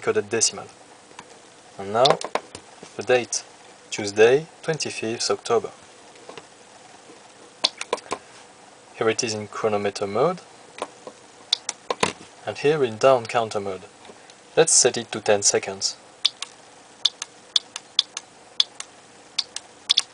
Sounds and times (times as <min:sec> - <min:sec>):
Speech: 0:00.0 - 0:00.8, 0:01.8 - 0:02.2, 0:03.0 - 0:05.8, 0:09.0 - 0:10.5, 0:12.4 - 0:13.9, 0:14.6 - 0:16.0.